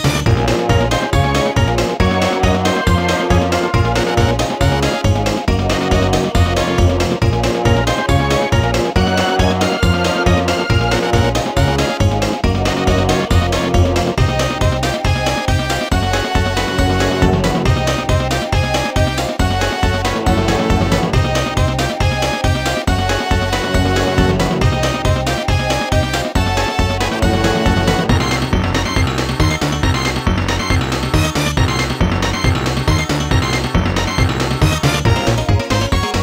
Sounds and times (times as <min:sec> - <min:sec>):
Video game music: 0:00.0 - 0:36.2.